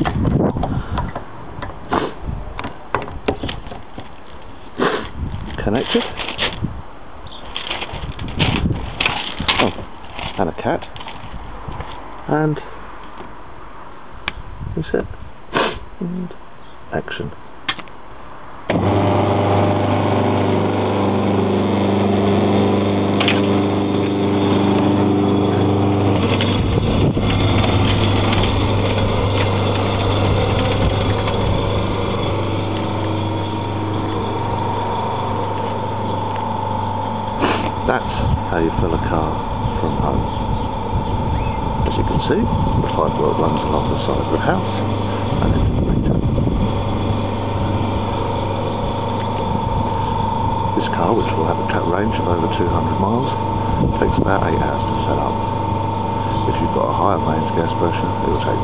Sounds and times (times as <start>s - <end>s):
Speech: 5.6s - 6.2s, 10.4s - 10.9s, 12.3s - 12.7s, 14.8s - 15.2s, 16.0s - 17.4s, 37.8s - 40.3s, 41.8s - 44.8s, 45.4s - 46.2s, 50.8s - 55.4s, 56.3s - 58.6s.